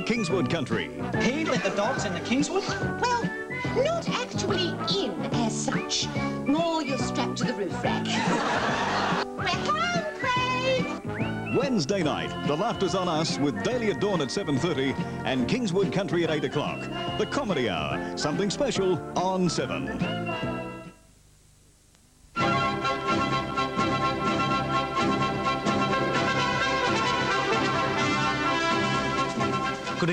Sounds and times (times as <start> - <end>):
Laughter: 1.4 - 2.4, 8.1 - 9.3.